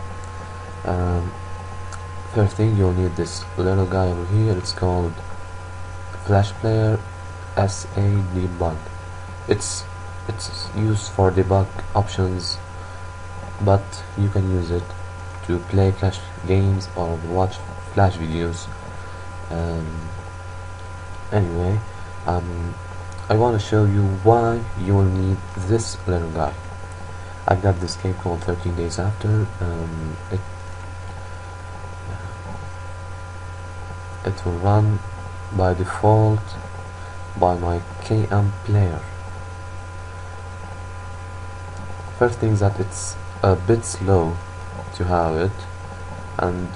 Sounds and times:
Speech: 0:00.8 - 0:01.4, 0:02.3 - 0:05.3, 0:06.2 - 0:08.9, 0:09.5 - 0:12.7, 0:13.6 - 0:18.8, 0:19.5 - 0:20.2, 0:21.3 - 0:26.6, 0:27.4 - 0:30.5, 0:34.2 - 0:36.6, 0:37.4 - 0:39.2, 0:42.2 - 0:45.8, 0:46.4 - 0:46.7.

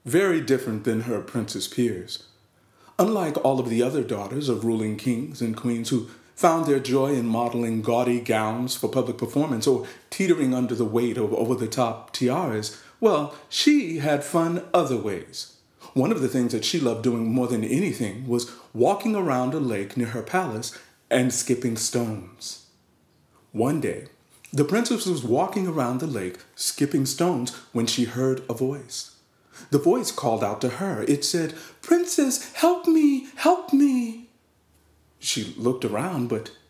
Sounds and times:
Speech: 0:00.0 - 0:02.2, 0:02.9 - 0:22.6, 0:23.5 - 0:34.4, 0:35.2 - 0:36.6.

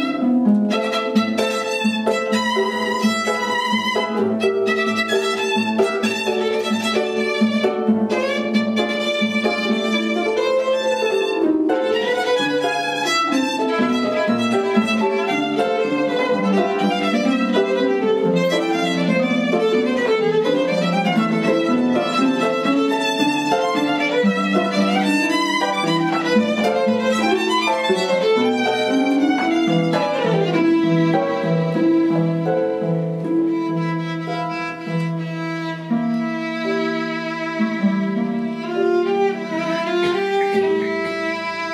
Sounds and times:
Violin, fiddle: 0:00.0 - 0:41.7.

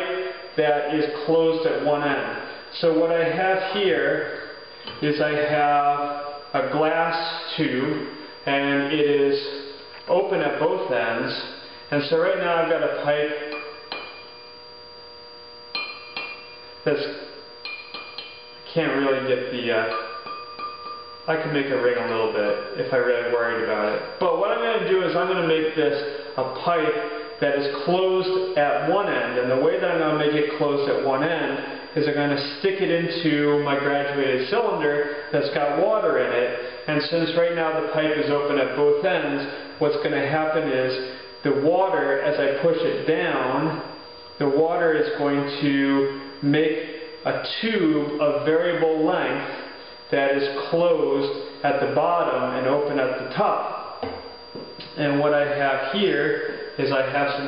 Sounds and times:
Speech: 0:00.0 - 0:04.4, 0:05.0 - 0:13.5, 0:16.9 - 0:17.3, 0:18.7 - 0:20.0, 0:21.3 - 0:53.8, 0:54.8 - 0:57.4.

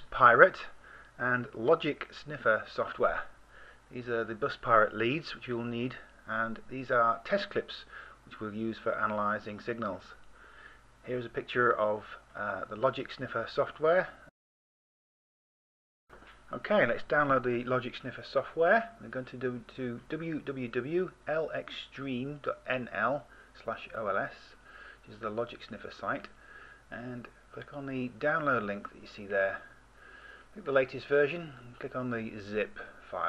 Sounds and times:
Speech: 0:00.0 - 0:03.3, 0:03.9 - 0:10.2, 0:11.0 - 0:14.3, 0:16.5 - 0:29.8, 0:30.6 - 0:33.2.

